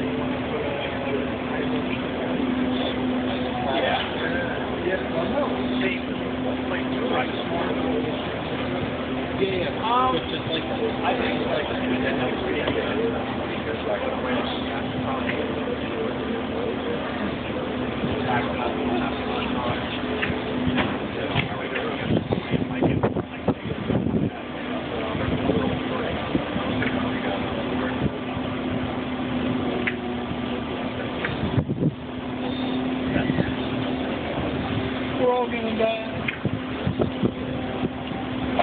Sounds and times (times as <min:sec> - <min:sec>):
Speech: 0:00.0 - 0:28.4, 0:32.9 - 0:36.3
Vehicle: 0:00.0 - 0:38.6.